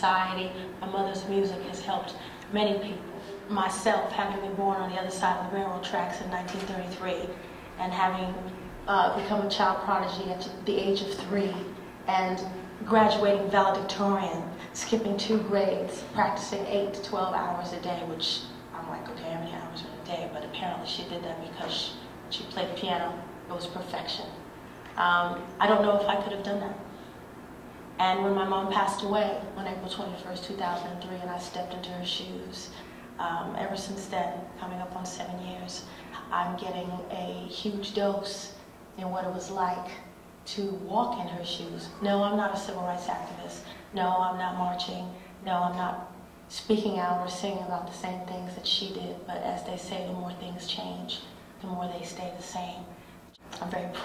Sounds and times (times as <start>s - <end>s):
Female speech, woman speaking: 0.0s - 26.9s, 28.0s - 54.0s.